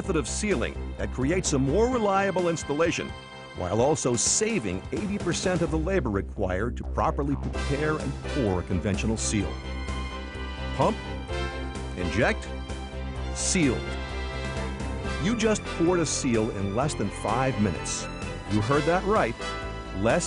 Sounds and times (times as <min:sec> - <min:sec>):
Speech: 0:00.0 - 0:09.6, 0:10.8 - 0:11.0, 0:12.0 - 0:12.5, 0:13.4 - 0:13.9, 0:15.2 - 0:19.4, 0:20.0 - 0:20.2
Music: 0:00.0 - 0:20.2.